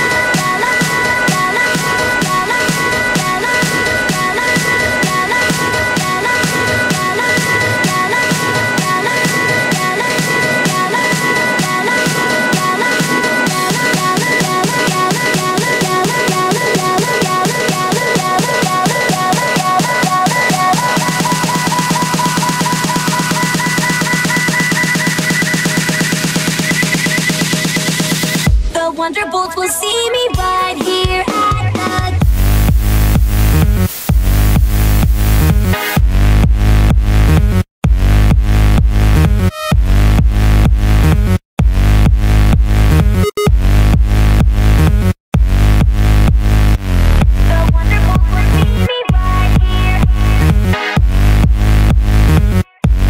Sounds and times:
Electronic dance music: 0.0s - 53.1s.

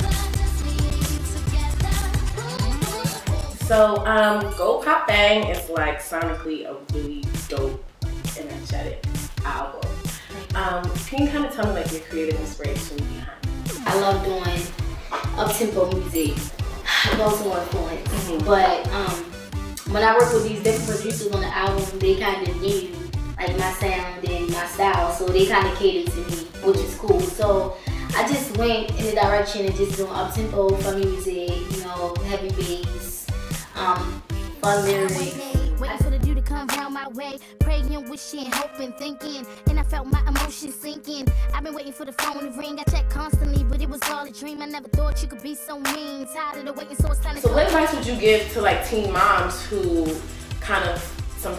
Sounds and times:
Music: 0.0s - 51.5s
Speech: 3.7s - 16.4s, 17.0s - 33.2s, 33.8s - 36.0s, 47.4s - 51.5s.

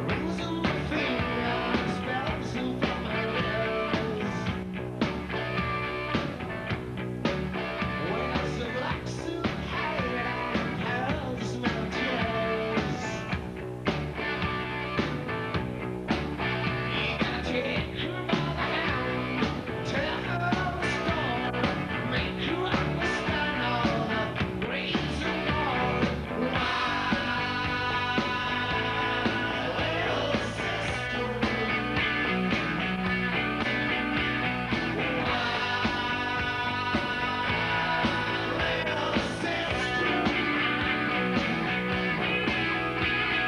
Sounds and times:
Music: 0.0s - 43.4s.

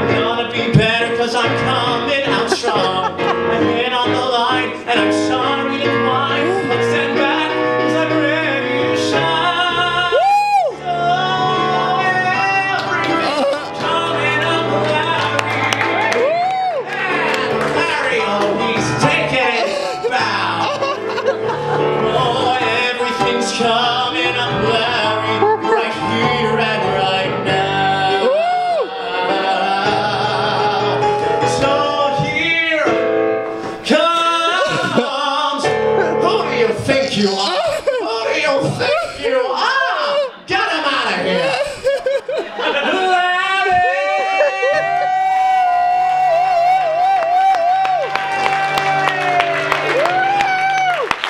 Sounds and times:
Singing: 0.0s - 21.0s, 21.8s - 33.0s, 42.7s - 51.2s
Laughter: 2.3s - 3.6s, 13.1s - 13.8s, 19.3s - 22.3s, 34.5s - 35.2s, 37.4s - 39.3s, 41.2s - 45.1s.

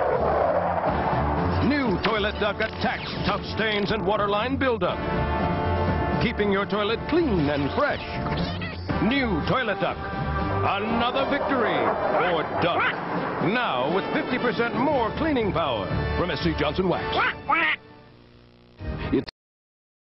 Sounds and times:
Music: 0.0s - 19.3s
Speech: 1.6s - 5.0s, 6.2s - 8.1s, 10.6s - 17.2s
Quack: 17.2s - 17.8s.

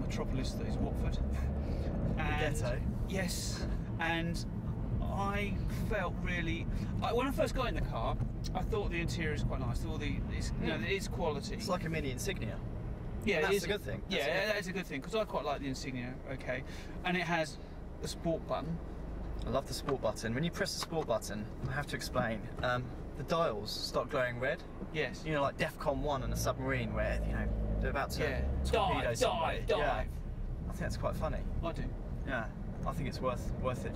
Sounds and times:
Car: 0.0s - 33.9s
Speech: 13.3s - 18.8s, 19.4s - 30.1s.

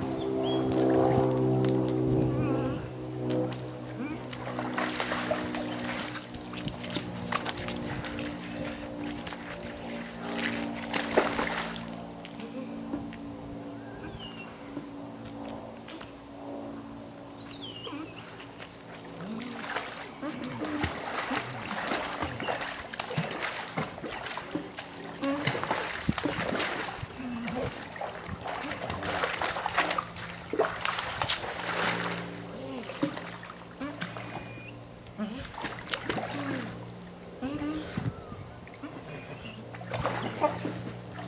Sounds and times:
Gurgling: 19.2s - 36.8s.

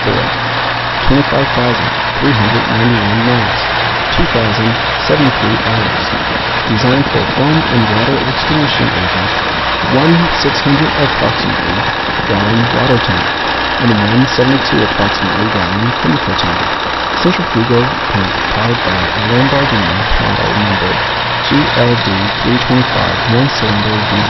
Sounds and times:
Speech: 0.0s - 0.4s, 1.0s - 24.3s
Truck: 0.0s - 24.3s.

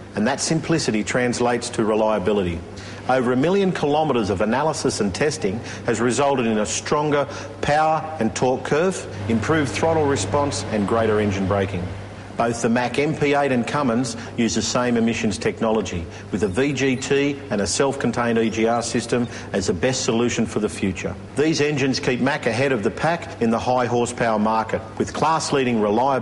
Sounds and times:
Speech: 0.2s - 26.2s.

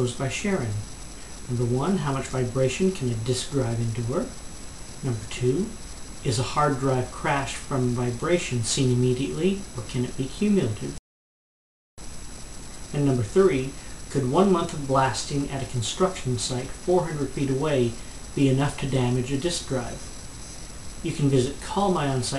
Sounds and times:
Speech: 0.0s - 0.9s, 1.5s - 4.4s, 5.0s - 11.0s, 12.9s - 20.1s, 21.0s - 22.3s.

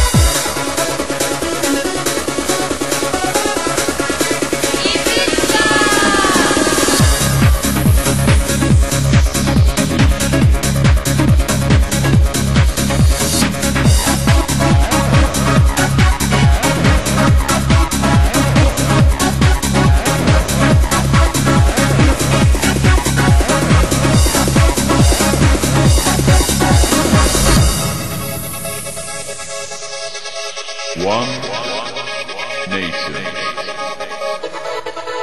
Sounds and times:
Techno: 0.0s - 35.2s.

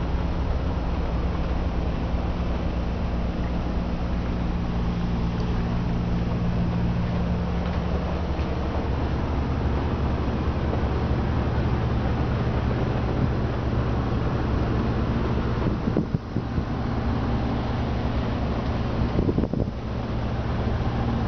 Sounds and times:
Bus: 0.0s - 21.2s.

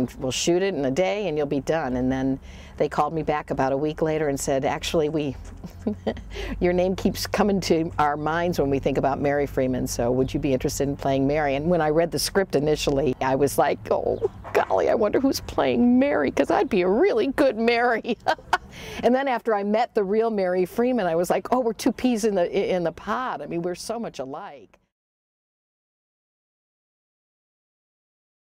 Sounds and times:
Speech: 0.0s - 5.4s, 6.5s - 18.4s, 19.0s - 24.7s.

